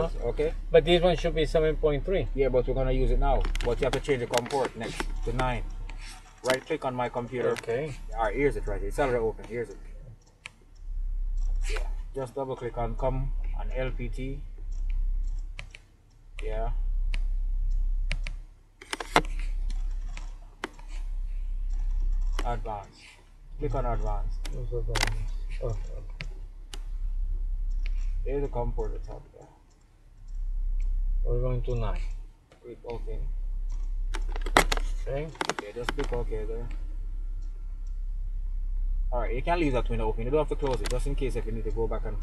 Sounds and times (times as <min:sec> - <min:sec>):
Speech: 0:00.0 - 0:05.6, 0:06.4 - 0:10.2, 0:11.7 - 0:14.5, 0:16.4 - 0:16.8, 0:22.4 - 0:26.2, 0:28.2 - 0:29.6, 0:31.2 - 0:33.3, 0:35.0 - 0:36.8, 0:39.1 - 0:42.2
Clicking: 0:09.4 - 0:11.9, 0:14.6 - 0:16.5, 0:17.1 - 0:21.0, 0:27.7 - 0:28.1, 0:28.8 - 0:31.0, 0:33.6 - 0:36.8, 0:37.4 - 0:38.0, 0:40.6 - 0:41.0.